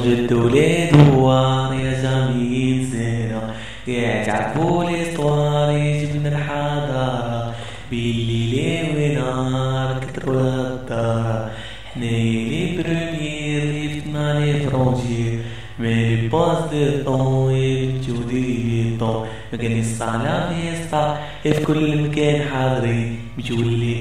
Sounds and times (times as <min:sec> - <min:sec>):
Mantra: 0:00.0 - 0:24.0.